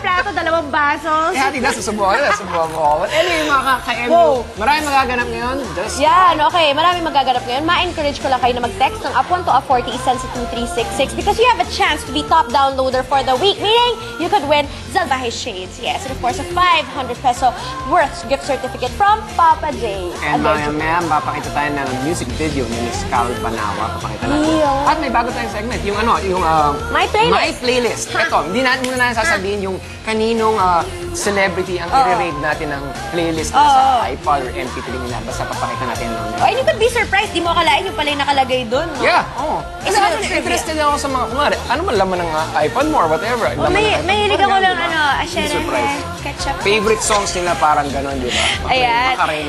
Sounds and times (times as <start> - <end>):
Music: 0.0 - 49.4.